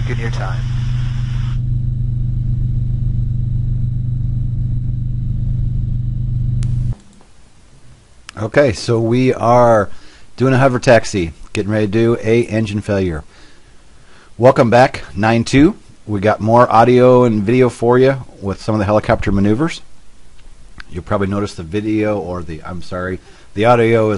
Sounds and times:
Speech: 0:00.0 - 0:00.6, 0:08.3 - 0:13.3, 0:14.4 - 0:19.9, 0:20.8 - 0:24.1.

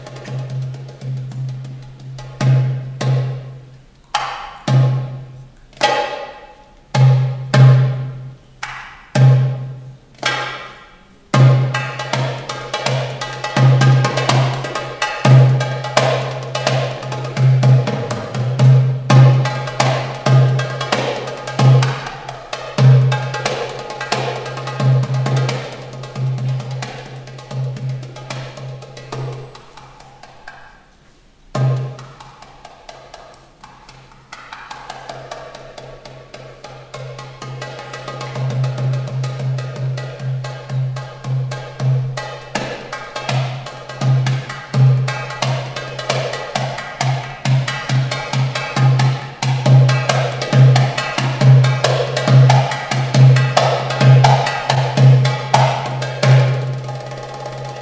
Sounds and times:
Drum: 0:11.3 - 0:30.6, 0:31.5 - 0:57.8.

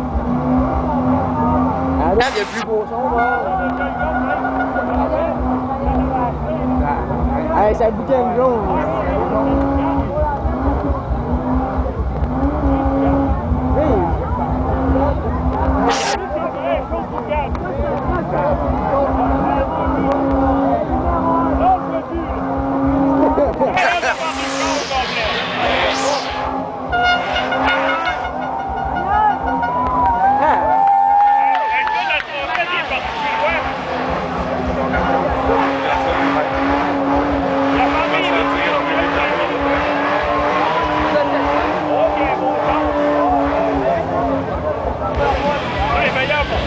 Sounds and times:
Accelerating, revving, vroom: 0:00.0 - 0:02.7, 0:03.6 - 0:16.6, 0:17.9 - 0:28.6, 0:32.2 - 0:46.6
Car: 0:00.0 - 0:46.6
Speech: 0:00.7 - 0:26.3, 0:31.4 - 0:36.9, 0:37.7 - 0:46.6.

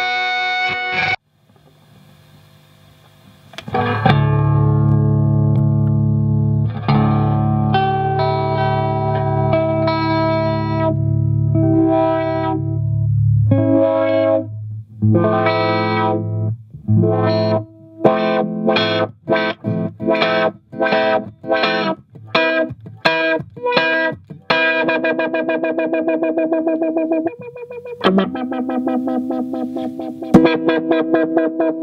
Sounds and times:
Guitar: 0:00.0 - 0:01.8, 0:03.3 - 0:31.8
Distortion: 0:00.0 - 0:31.8
Effects unit: 0:00.0 - 0:31.8.

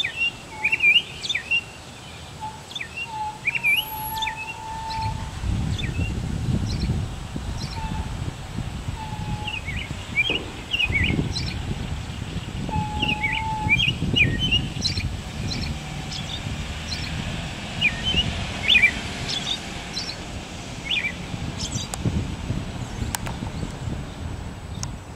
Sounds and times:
Bird: 0:00.0 - 0:06.1, 0:09.0 - 0:17.1.

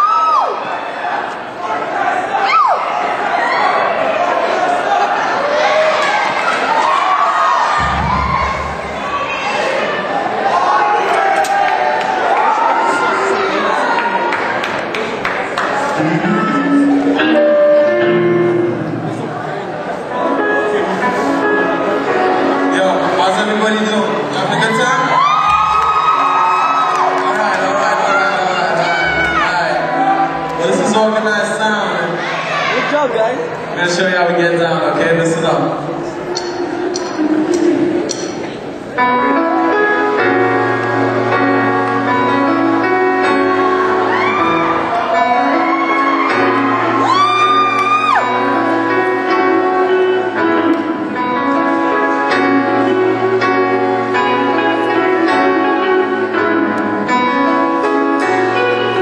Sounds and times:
Crowd: 0:00.0 - 0:59.0
Music: 0:06.7 - 0:09.8, 0:15.6 - 0:59.0.

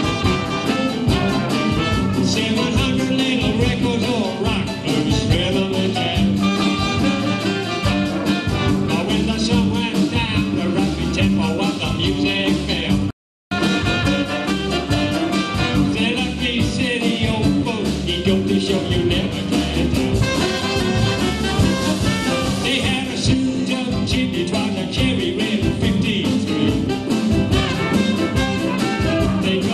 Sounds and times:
Bowed string instrument: 0:00.0 - 0:12.9, 0:13.6 - 0:29.7
Brass instrument: 0:00.0 - 0:29.7
Guitar: 0:00.0 - 0:29.7
Rock and roll: 0:00.0 - 0:29.7.

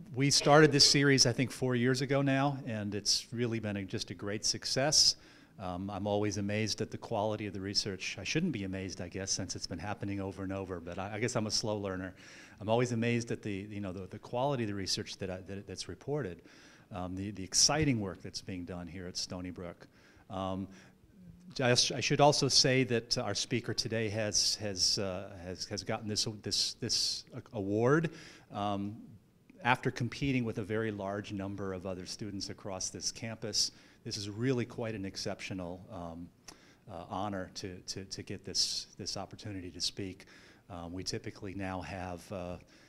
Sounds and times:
Speech: 0:00.0 - 0:20.8, 0:21.4 - 0:36.3, 0:36.9 - 0:42.7.

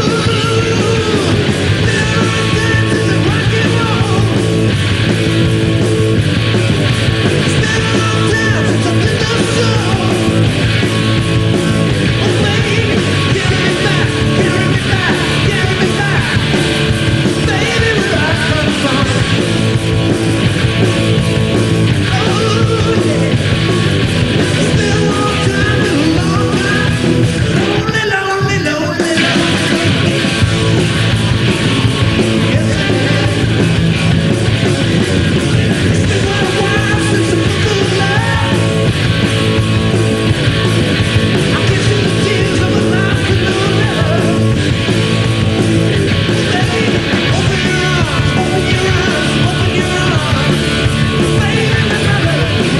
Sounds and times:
Rock and roll: 0:00.0 - 0:52.7.

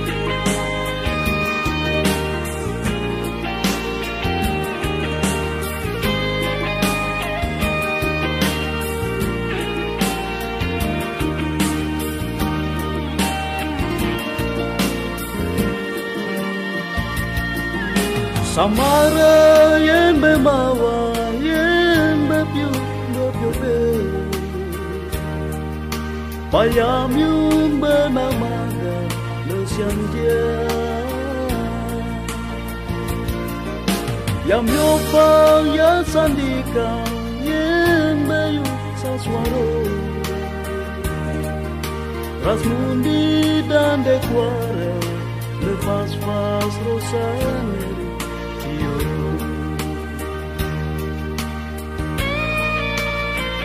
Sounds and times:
Soundtrack music: 0:00.0 - 0:53.6.

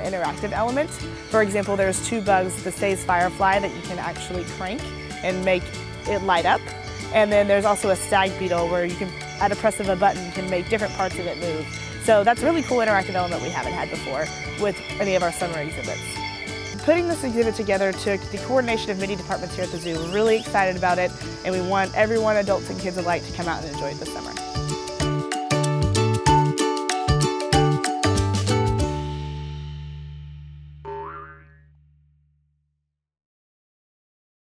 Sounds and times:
Music: 0:00.0 - 0:30.8.

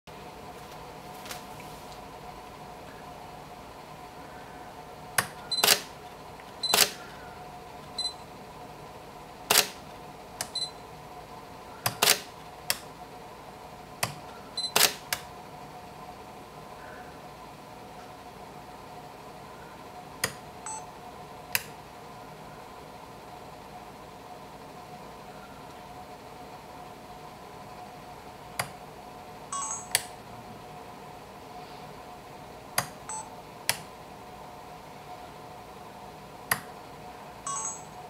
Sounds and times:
Camera: 0:05.6 - 0:05.9, 0:06.7 - 0:07.0, 0:12.0 - 0:12.3, 0:14.7 - 0:15.0.

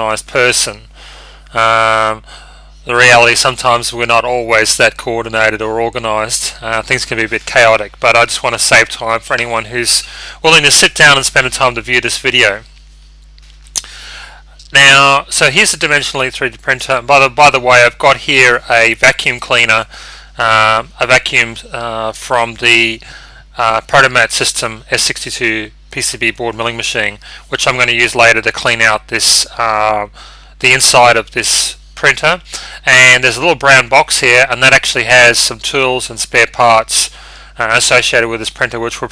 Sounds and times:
Speech: 0:00.0 - 0:00.9, 0:01.5 - 0:02.3, 0:02.9 - 0:12.7, 0:14.6 - 0:39.1.

